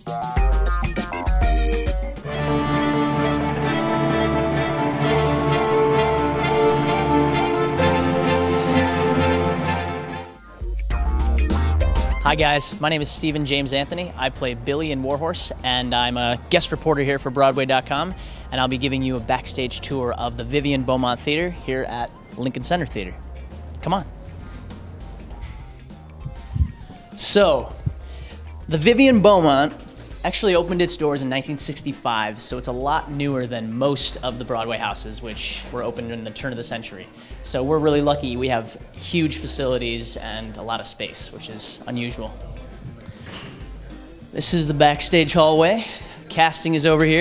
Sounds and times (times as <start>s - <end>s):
Music: 0.0s - 47.2s
Speech: 12.2s - 23.2s, 23.8s - 24.1s, 27.2s - 27.8s, 28.7s - 42.6s, 44.4s - 47.2s.